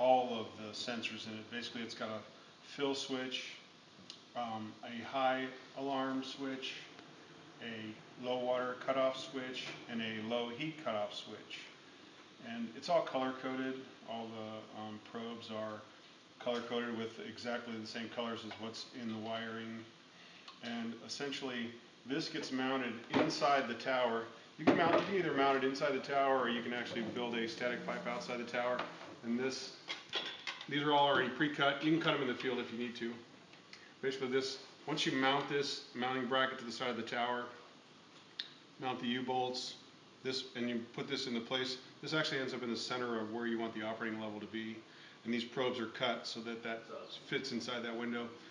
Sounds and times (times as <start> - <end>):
Speech: 0.0 - 3.7, 4.4 - 7.0, 7.6 - 11.8, 12.4 - 19.9, 20.5 - 29.8, 30.7 - 33.3, 34.0 - 37.7, 38.8 - 48.4.